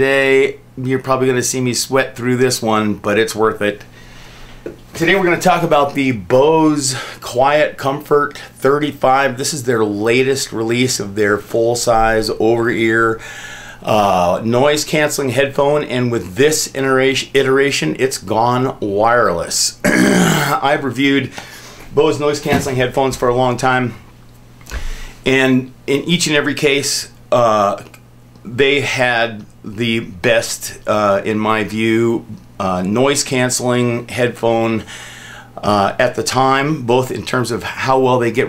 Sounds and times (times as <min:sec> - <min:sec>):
Speech: 0:00.0 - 0:03.9, 0:05.0 - 0:13.2, 0:13.8 - 0:21.3, 0:21.9 - 0:24.0, 0:25.3 - 0:34.9, 0:35.6 - 0:38.4.